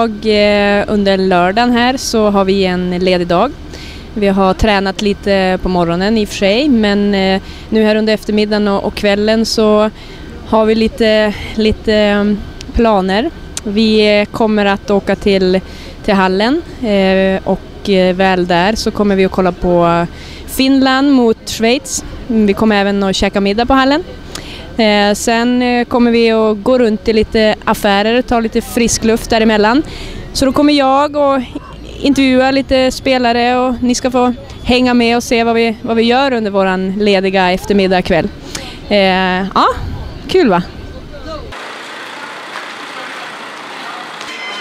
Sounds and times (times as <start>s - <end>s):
Speech: 0.0s - 3.5s, 4.2s - 41.6s.